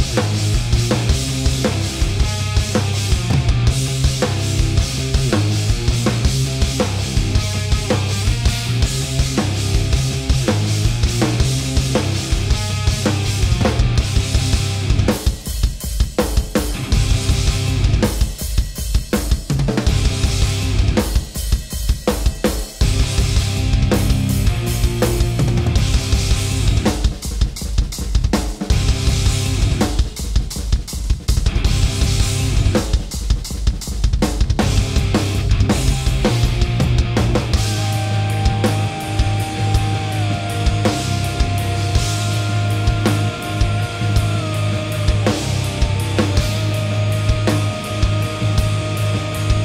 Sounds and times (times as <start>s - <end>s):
Music: 0.0s - 49.6s.